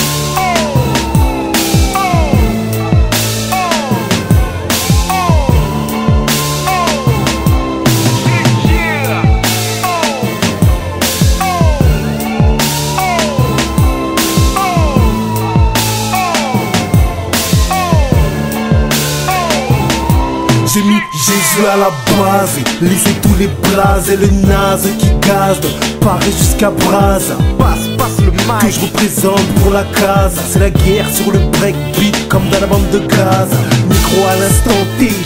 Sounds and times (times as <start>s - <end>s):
Music: 0.0s - 35.2s.